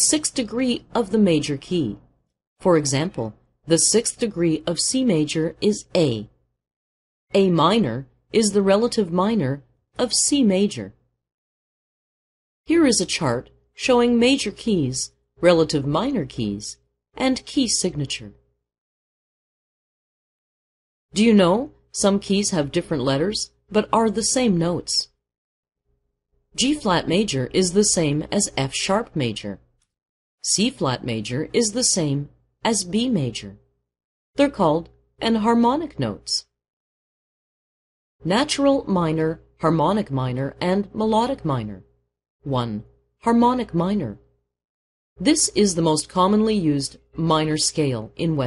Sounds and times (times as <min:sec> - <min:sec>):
Speech: 0:00.0 - 0:02.0, 0:02.6 - 0:06.4, 0:07.3 - 0:11.0, 0:12.7 - 0:18.4, 0:21.2 - 0:25.2, 0:26.6 - 0:29.7, 0:30.4 - 0:33.7, 0:34.4 - 0:36.5, 0:38.2 - 0:41.9, 0:42.5 - 0:44.3, 0:45.2 - 0:48.4.